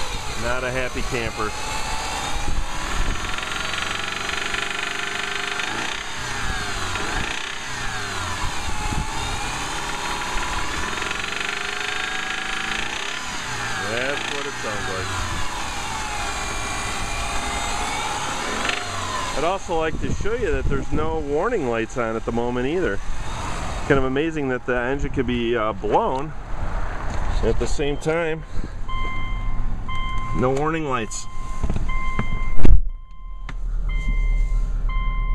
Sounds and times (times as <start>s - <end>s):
Speech: 0.4s - 1.6s, 13.8s - 15.1s, 19.4s - 23.0s, 23.9s - 26.3s, 27.4s - 28.4s, 30.4s - 31.3s.